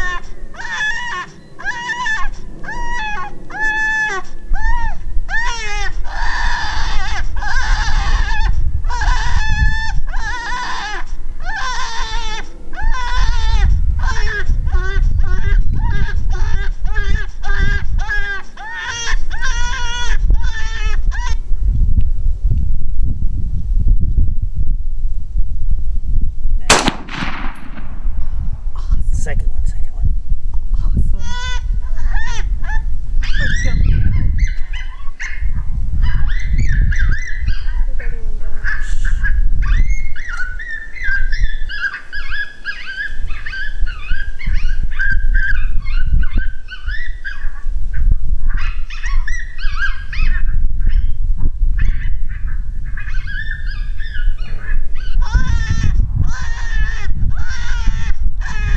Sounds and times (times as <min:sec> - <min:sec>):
Gunshot, gunfire: 0:26.7 - 0:28.1.